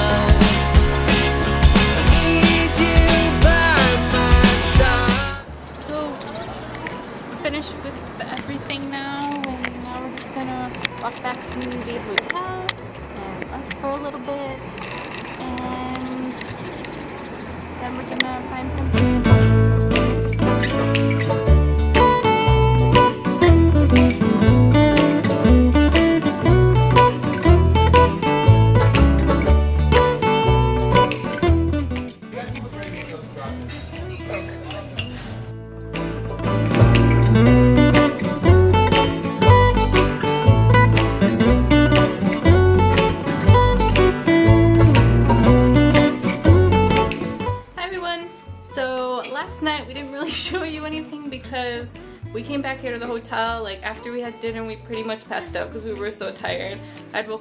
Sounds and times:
Music: 0.0s - 57.4s
Speech: 5.8s - 14.6s, 15.4s - 16.4s, 17.8s - 18.9s, 32.3s - 33.6s, 47.8s - 57.4s.

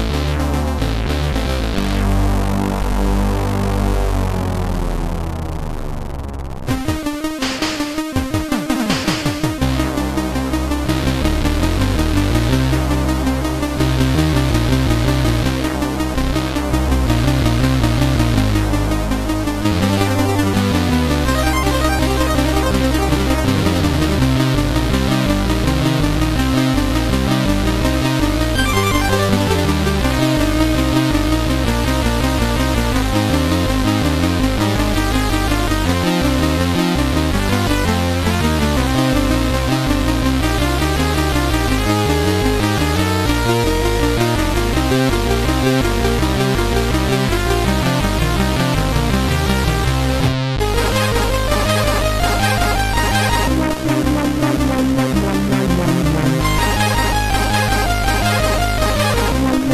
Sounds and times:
Theme music: 6.7s - 32.6s, 44.0s - 59.7s.

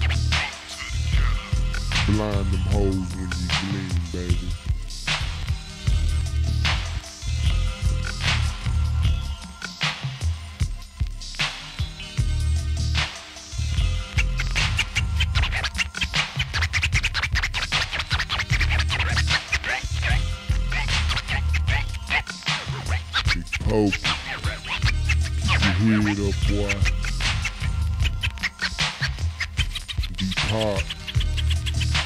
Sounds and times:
Music: 0.0s - 32.0s.

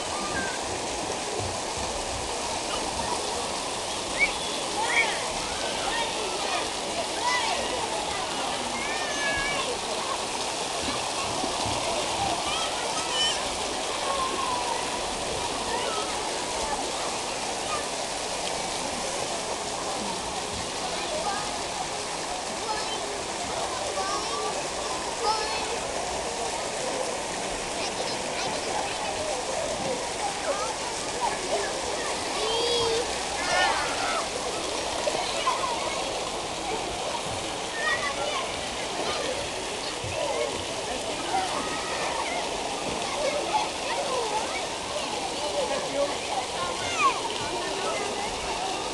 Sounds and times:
Speech: 0.0s - 48.9s
Stream: 0.0s - 48.9s.

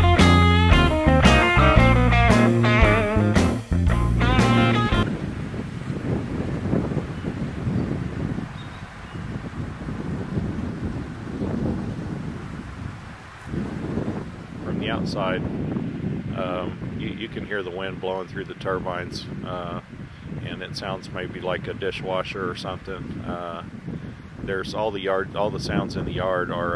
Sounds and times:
Wind noise (microphone): 4.4s - 26.7s.

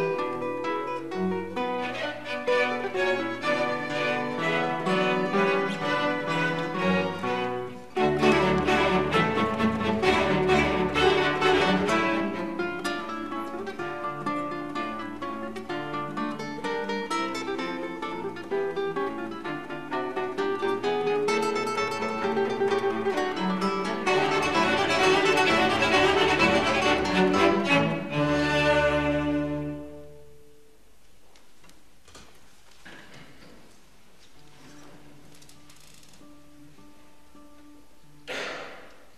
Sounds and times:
Violin, fiddle: 0.0s - 16.0s, 21.4s - 30.2s
Cello: 0.0s - 30.7s
Classical music: 0.0s - 30.8s
Guitar: 0.0s - 30.8s, 34.4s - 38.4s
Orchestra: 0.0s - 30.9s.

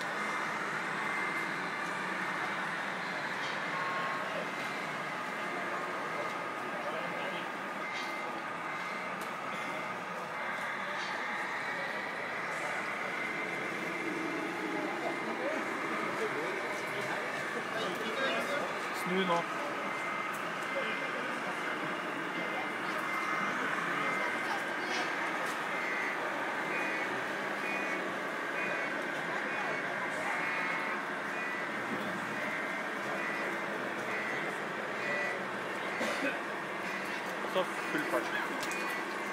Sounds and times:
Speech: 20.6s - 26.3s, 37.1s - 38.8s.

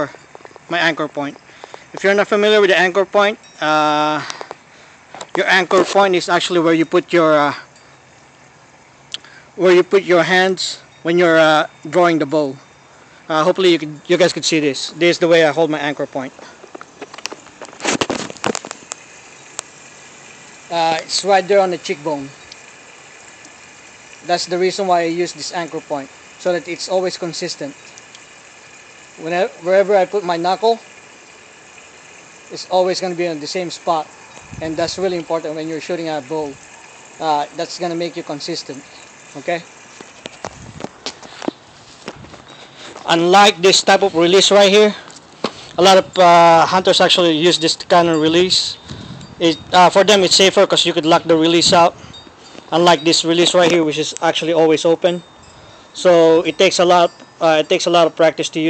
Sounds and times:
Speech: 0.7s - 1.4s, 2.0s - 4.2s, 5.3s - 7.6s, 9.6s - 12.6s, 13.3s - 16.4s, 20.7s - 22.4s, 24.2s - 27.8s, 29.2s - 30.8s, 32.5s - 36.6s, 37.2s - 39.7s, 43.1s - 45.0s, 45.8s - 48.8s, 49.4s - 52.0s, 52.7s - 55.2s, 56.0s - 58.6s.

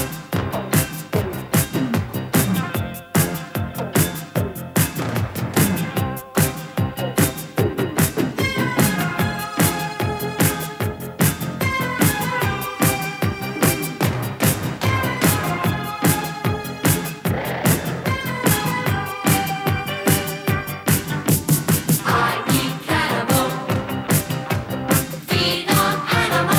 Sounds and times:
Funk: 0.0s - 26.5s.

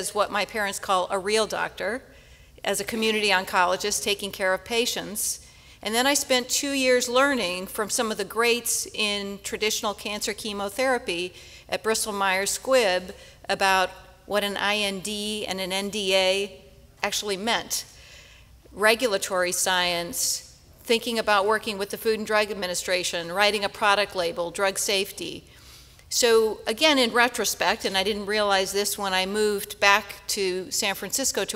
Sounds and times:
Speech: 2.7s - 17.8s.

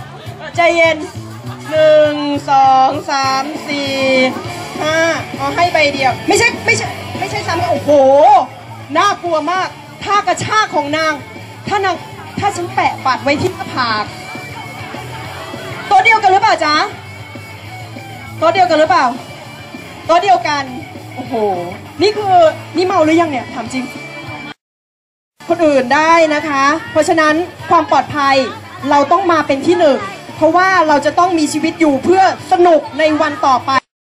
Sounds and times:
Speech: 0.0s - 14.1s, 25.5s - 33.9s
Music: 0.0s - 24.6s, 25.4s - 33.9s.

